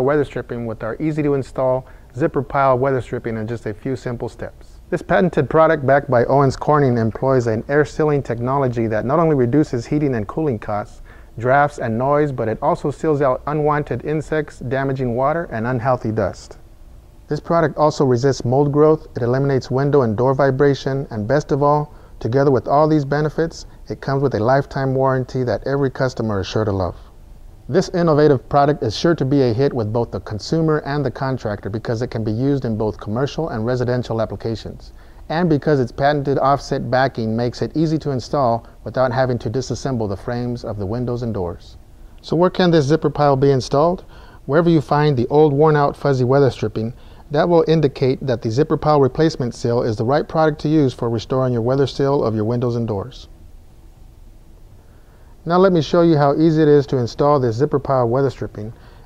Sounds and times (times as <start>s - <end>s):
Speech: 0.0s - 16.6s, 17.3s - 27.1s, 27.7s - 53.3s, 55.4s - 58.8s.